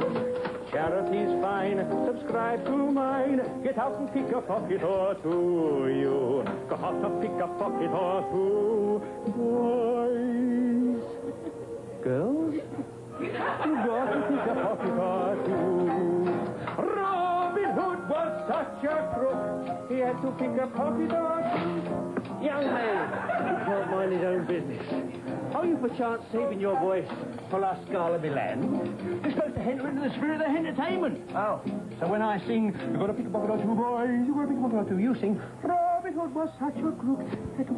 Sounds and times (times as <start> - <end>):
Inside, public space: 0.0 - 37.7
Music: 0.0 - 37.7.